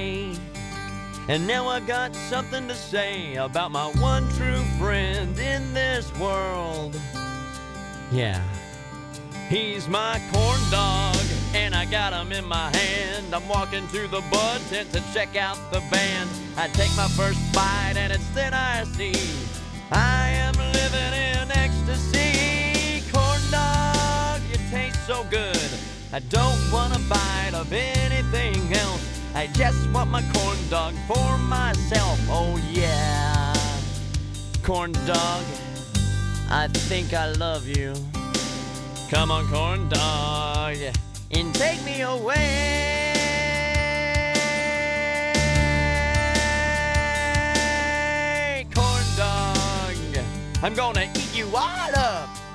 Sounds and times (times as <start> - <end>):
Music: 0.0 - 52.5.